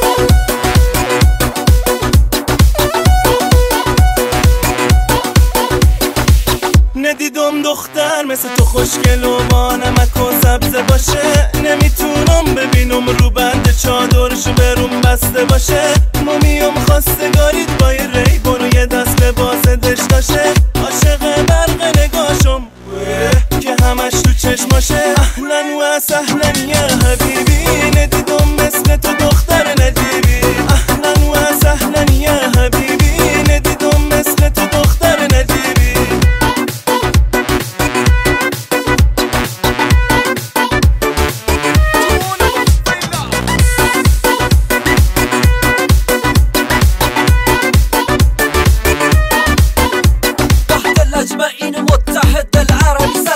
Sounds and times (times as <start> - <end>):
Music: 0.0 - 53.3.